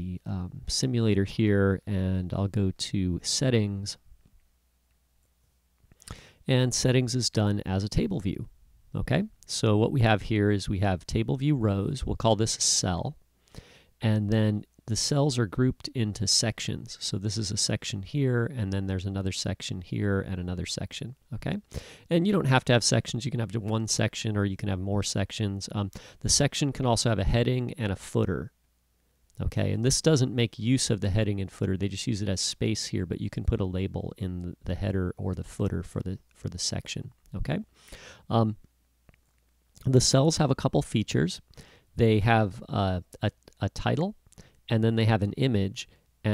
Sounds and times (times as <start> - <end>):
Speech: 0.0 - 4.0, 6.4 - 13.2, 14.0 - 28.6, 29.4 - 38.6, 39.8 - 46.3.